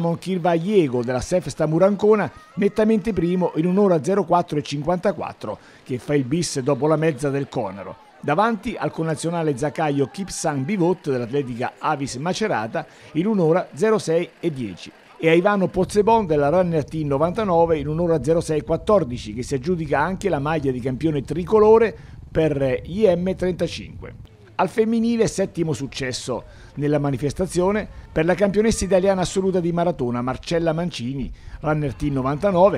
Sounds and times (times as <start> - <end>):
Speech: 0.0 - 32.7.